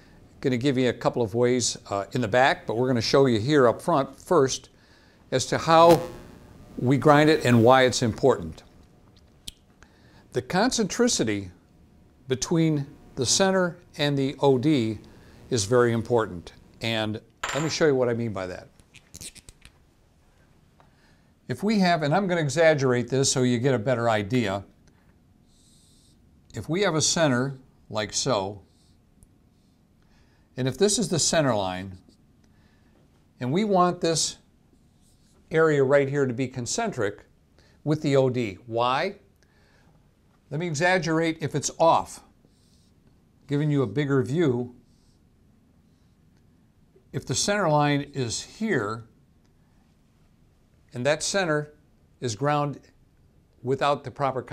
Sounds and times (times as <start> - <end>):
Speech: 0.4 - 4.7, 5.3 - 6.1, 6.8 - 8.7, 10.3 - 11.6, 12.3 - 18.7, 21.5 - 24.7, 26.5 - 28.7, 30.6 - 32.0, 33.4 - 34.5, 35.5 - 39.3, 40.5 - 42.3, 43.5 - 44.8, 47.1 - 49.1, 50.9 - 52.9, 53.6 - 54.5.